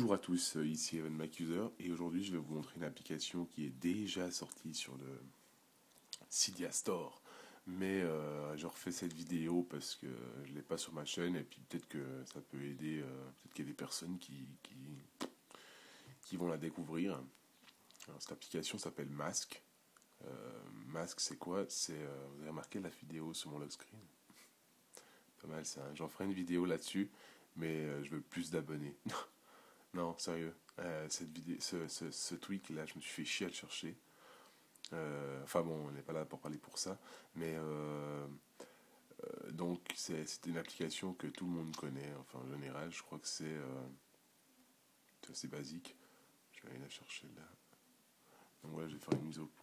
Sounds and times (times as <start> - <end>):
Speech: 0.0 - 5.4, 6.2 - 15.4, 16.2 - 17.4, 18.0 - 24.1, 25.4 - 34.0, 34.8 - 38.4, 39.1 - 44.0, 45.2 - 47.6, 48.6 - 49.6.